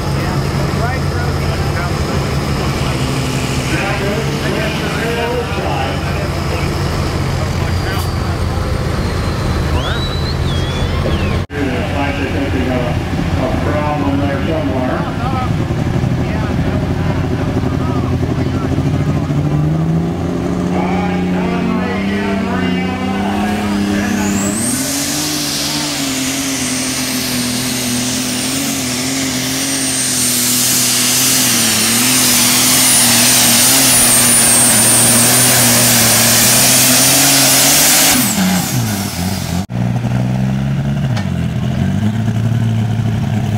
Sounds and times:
Truck: 0:00.0 - 0:43.5.

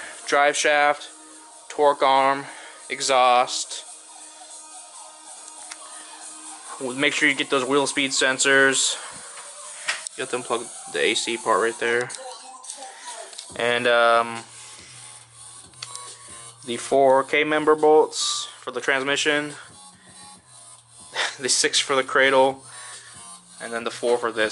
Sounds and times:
Music: 0:00.0 - 0:24.5
Speech: 0:06.8 - 0:09.0, 0:10.2 - 0:14.4, 0:16.7 - 0:19.6, 0:21.4 - 0:22.6, 0:23.6 - 0:24.5.

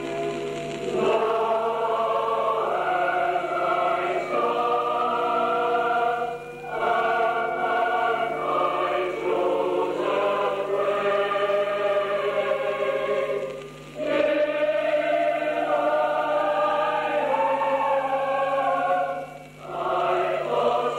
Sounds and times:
Chant: 0:00.0 - 0:20.9.

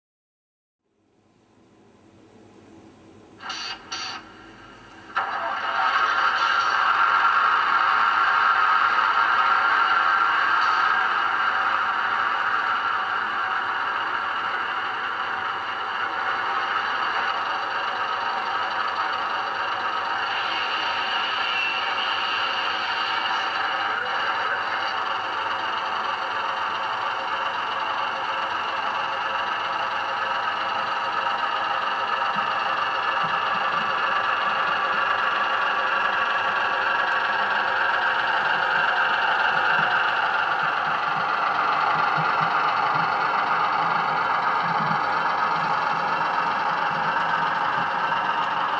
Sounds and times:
Clatter: 0:04.9 - 0:48.7.

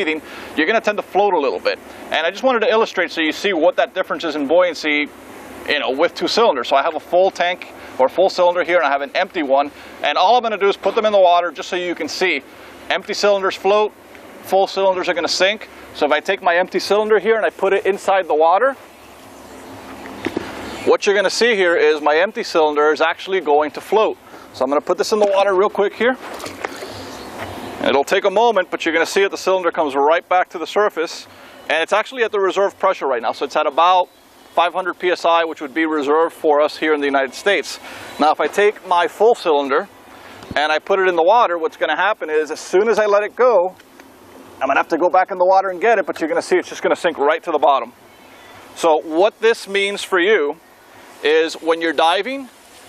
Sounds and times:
Speech: 0:00.0 - 0:05.1, 0:05.7 - 0:18.8, 0:20.9 - 0:26.2, 0:27.8 - 0:39.9, 0:40.6 - 0:43.8, 0:44.6 - 0:48.0, 0:48.8 - 0:50.6, 0:51.2 - 0:52.6
Outside, urban or manmade: 0:00.0 - 0:52.8.

